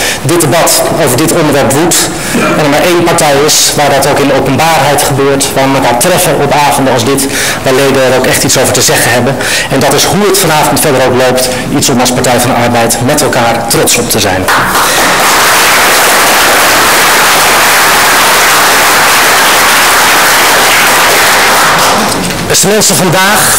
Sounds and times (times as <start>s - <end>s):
Narration, monologue: 0.0s - 14.5s, 21.9s - 23.5s
Male speech, man speaking: 0.2s - 14.5s, 22.5s - 23.5s.